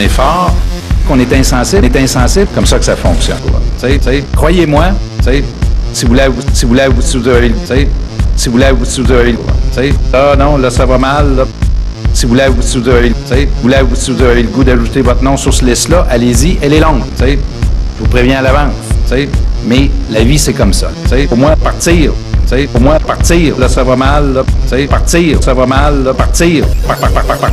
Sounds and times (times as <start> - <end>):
Speech: 0.0 - 11.5, 12.2 - 26.7
Techno: 0.0 - 27.5.